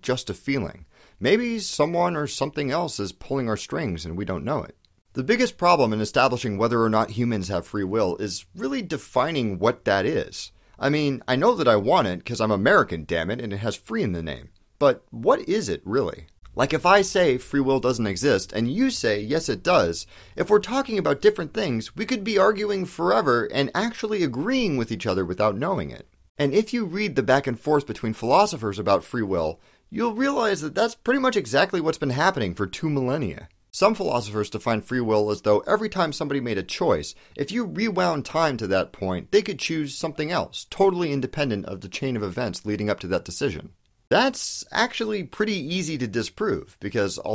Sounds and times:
Speech: 0.0s - 47.3s.

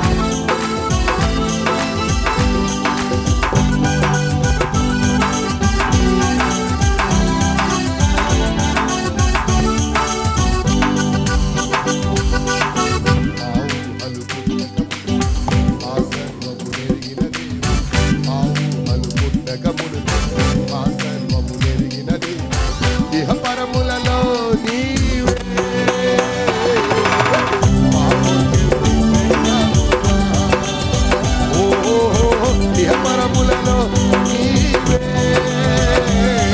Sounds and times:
Music: 0.0s - 36.5s.

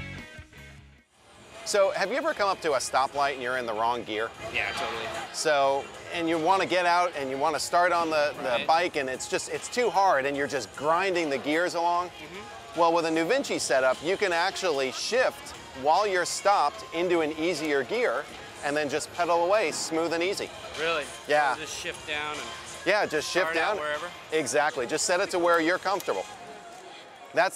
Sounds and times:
Music: 0.0s - 27.5s
Speech: 1.7s - 26.3s.

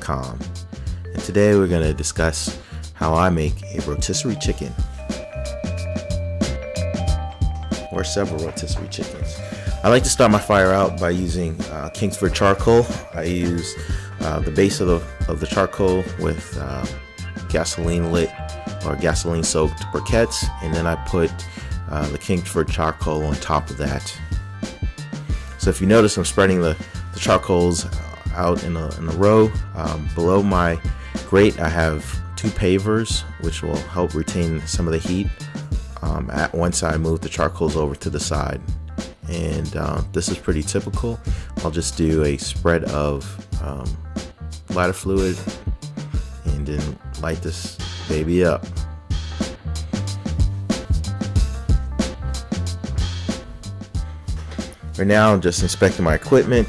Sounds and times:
Speech: 0.0s - 0.5s, 1.1s - 4.8s, 7.9s - 24.2s, 25.6s - 35.4s, 36.0s - 38.6s, 39.2s - 44.0s, 44.7s - 45.5s, 46.4s - 48.7s, 55.0s - 56.6s
Music: 0.0s - 56.6s.

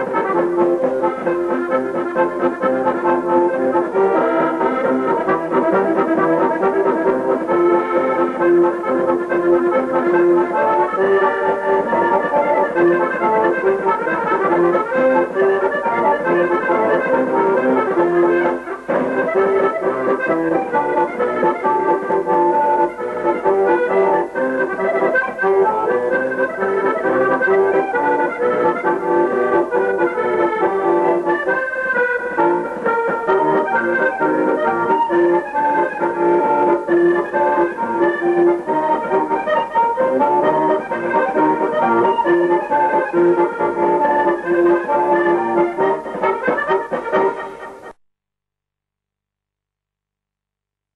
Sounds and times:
Accordion: 0.0s - 48.0s.

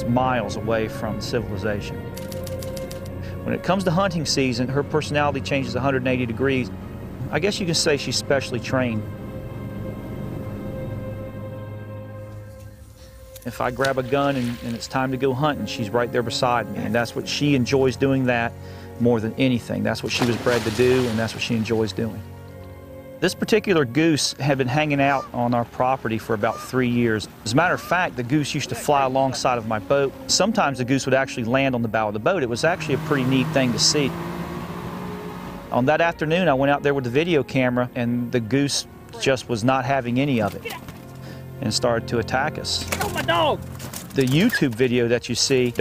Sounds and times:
Music: 0.0s - 45.8s
Speech: 3.5s - 6.7s, 7.3s - 9.0s, 13.5s - 22.2s, 23.2s - 34.1s, 35.8s - 40.8s, 41.6s - 43.6s, 44.2s - 45.8s.

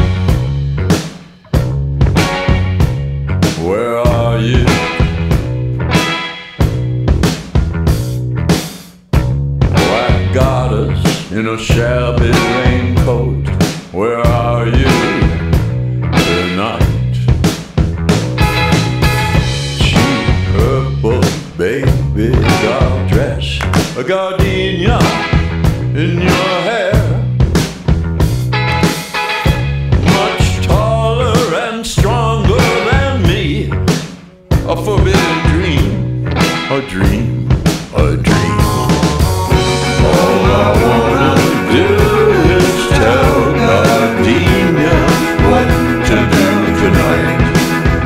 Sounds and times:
Music: 0.0s - 48.0s.

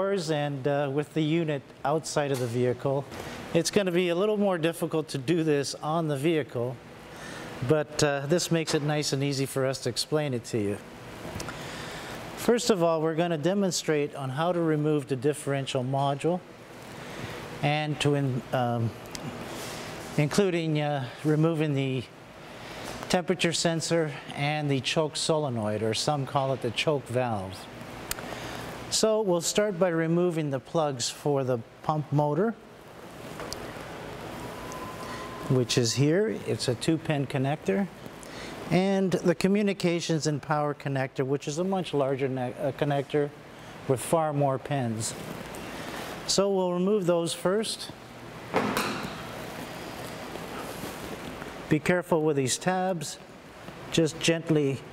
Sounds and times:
Speech: 0.0s - 6.8s, 7.6s - 10.8s, 12.4s - 16.4s, 17.6s - 19.0s, 20.2s - 22.1s, 23.1s - 27.7s, 28.9s - 32.6s, 35.5s - 38.0s, 38.7s - 45.2s, 46.3s - 48.0s, 51.7s - 53.2s, 53.9s - 54.9s.

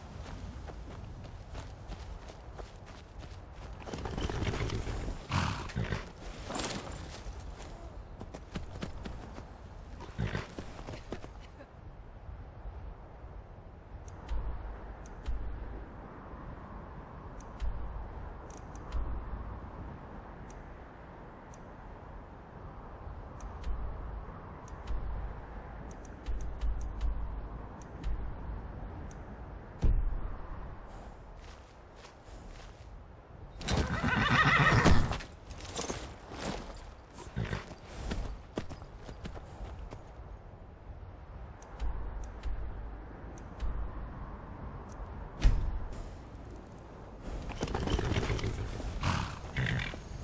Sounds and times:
Clip-clop: 0.3s - 11.5s, 33.6s - 40.2s, 47.3s - 50.2s.

